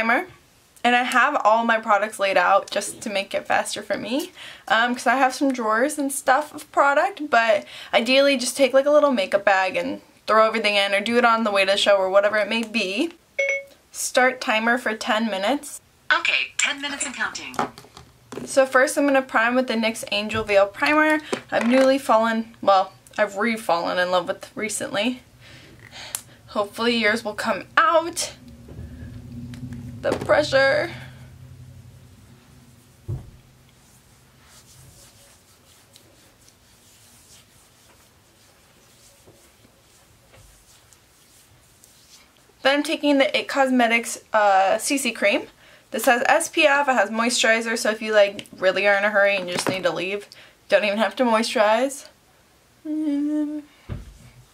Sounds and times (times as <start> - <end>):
Speech: 18.5 - 25.2.